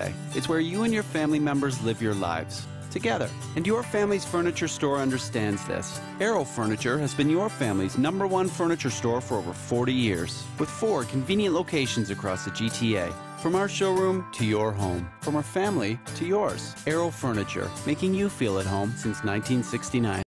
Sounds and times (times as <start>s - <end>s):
Music: 0.0s - 20.3s
Speech: 0.0s - 20.3s.